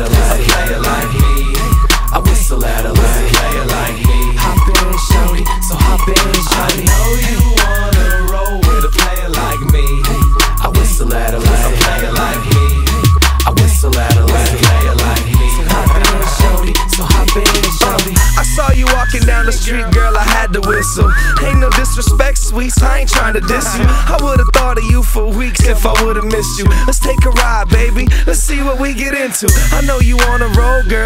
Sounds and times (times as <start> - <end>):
Whistle: 0.0 - 27.9, 29.5 - 31.0
Music: 0.0 - 31.0.